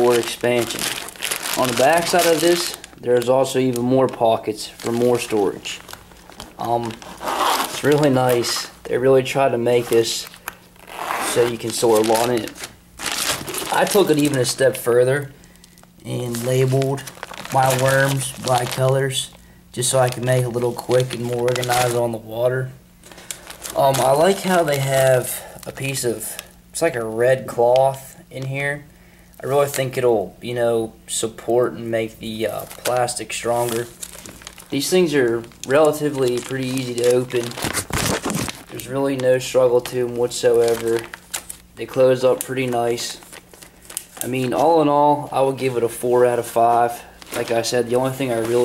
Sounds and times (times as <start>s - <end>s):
Speech: 0.0s - 0.9s, 1.5s - 5.8s, 6.6s - 7.0s, 7.8s - 10.3s, 11.2s - 12.6s, 13.7s - 15.4s, 16.0s - 22.8s, 23.8s - 34.0s, 34.7s - 37.6s, 38.7s - 41.1s, 41.8s - 43.2s, 44.2s - 48.6s.